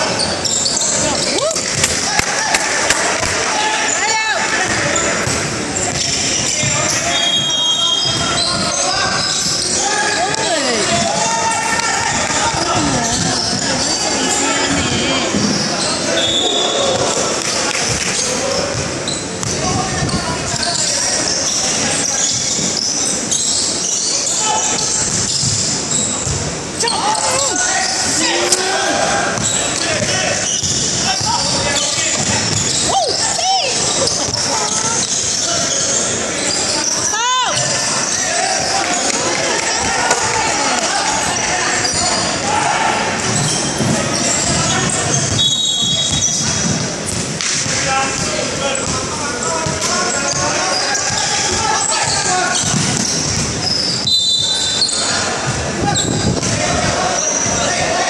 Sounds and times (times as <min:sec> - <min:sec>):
Inside, large room or hall: 0:00.0 - 0:58.1
Basketball bounce: 0:01.6 - 0:03.4, 0:04.7 - 0:08.8, 0:17.0 - 0:20.2, 0:45.2 - 0:49.0, 0:52.0 - 0:53.6
Speech: 0:03.0 - 0:23.2, 0:26.8 - 0:46.9, 0:47.6 - 0:53.1.